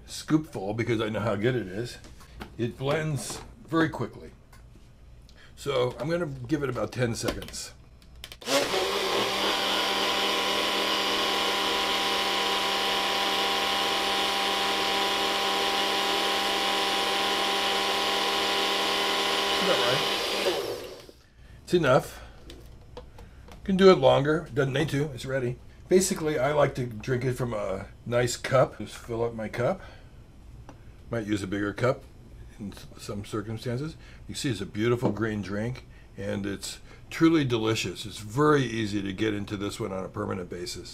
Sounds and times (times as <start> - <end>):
Speech: 0.0 - 4.4, 5.6 - 7.8, 19.6 - 20.1, 21.7 - 22.3, 23.6 - 29.9, 31.1 - 40.9
Inside, small room: 0.0 - 40.9
Blender: 8.4 - 21.2.